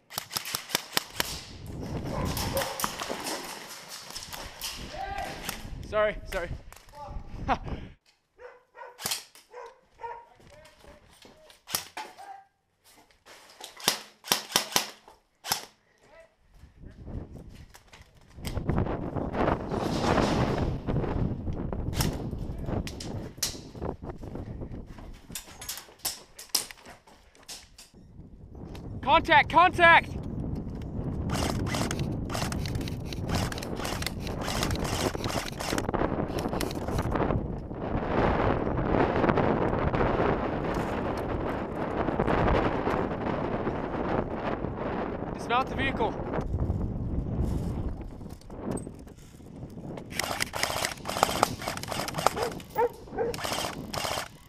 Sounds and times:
Cap gun: 0.1s - 1.4s, 9.0s - 9.4s, 13.8s - 15.7s, 50.1s - 52.6s, 53.4s - 54.3s
Speech: 4.9s - 7.3s, 10.2s - 11.6s, 16.0s - 17.1s, 29.0s - 30.2s, 45.4s - 46.2s.

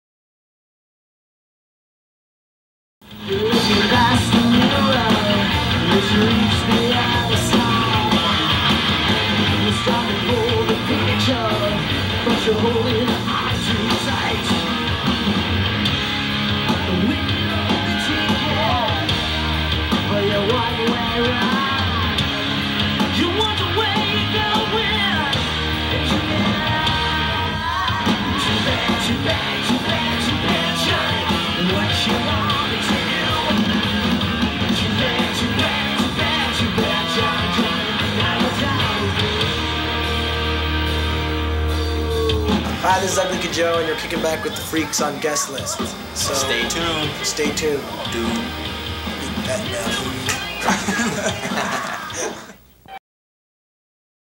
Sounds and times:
Music: 3.0s - 53.0s
Singing: 3.2s - 15.0s, 16.7s - 22.5s, 23.1s - 39.8s.

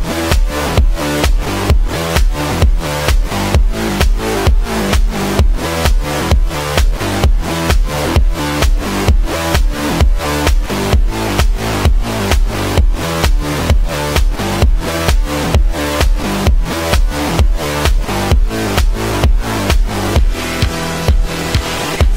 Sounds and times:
Music: 0.0s - 22.1s.

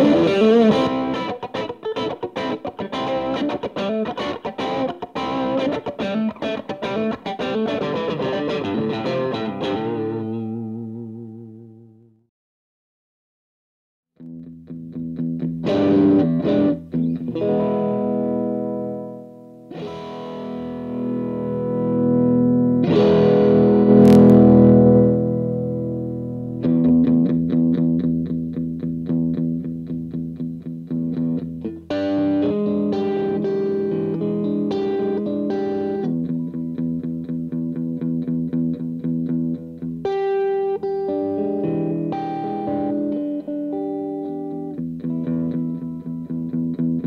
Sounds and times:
Effects unit: 0.0s - 12.3s, 14.2s - 47.0s
Guitar: 0.0s - 12.3s, 14.2s - 47.0s.

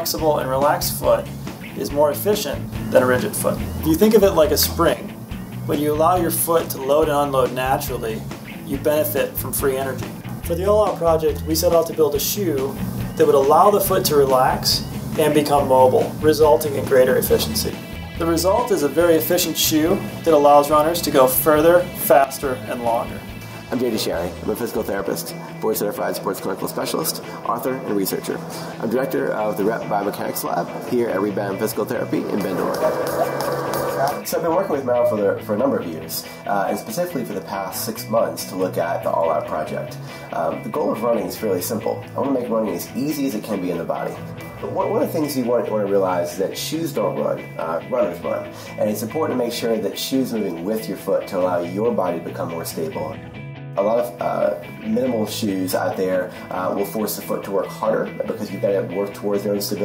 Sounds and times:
Speech: 0.0s - 33.1s, 33.9s - 53.2s, 53.8s - 59.8s
Music: 0.0s - 59.8s.

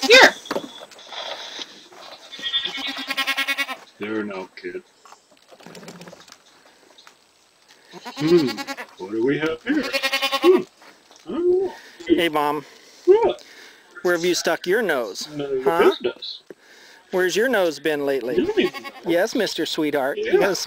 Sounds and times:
Bleat: 2.2s - 3.8s, 7.9s - 8.9s, 9.7s - 10.6s, 18.5s - 19.1s.

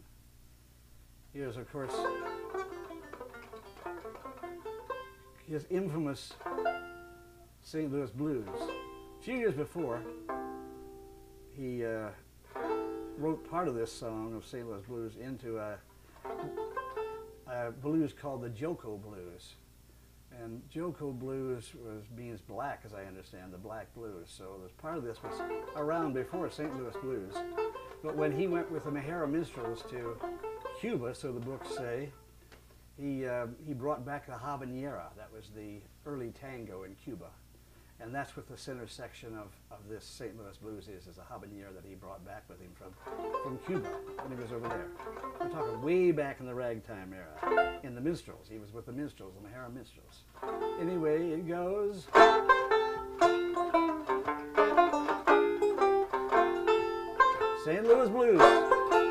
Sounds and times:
Speech: 1.3s - 2.2s, 5.4s - 6.4s, 7.6s - 8.6s, 9.2s - 10.1s, 11.6s - 12.3s, 13.2s - 15.8s, 17.5s - 19.6s, 20.3s - 27.4s, 28.0s - 32.2s, 33.0s - 37.4s, 38.0s - 44.9s, 45.5s - 52.1s, 57.6s - 58.7s
Music: 1.8s - 14.2s, 16.2s - 17.6s, 25.0s - 32.3s, 43.0s - 46.1s, 47.4s - 47.9s, 50.3s - 59.1s.

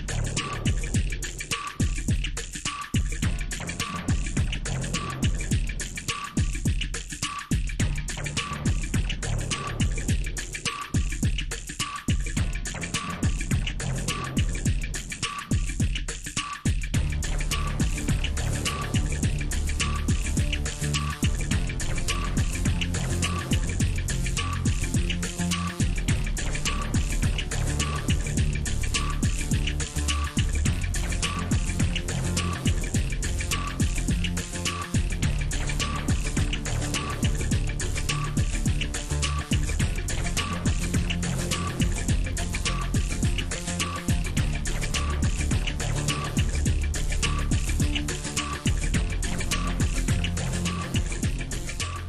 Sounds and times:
Music: 0.0s - 52.0s.

